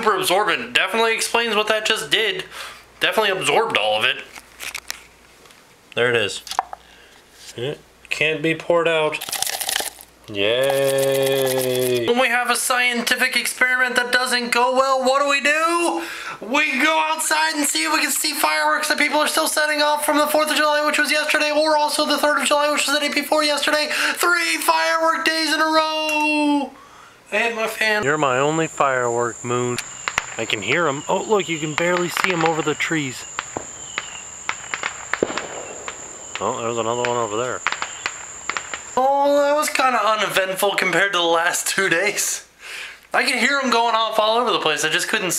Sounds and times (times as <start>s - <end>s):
Cricket: 28.0s - 39.8s.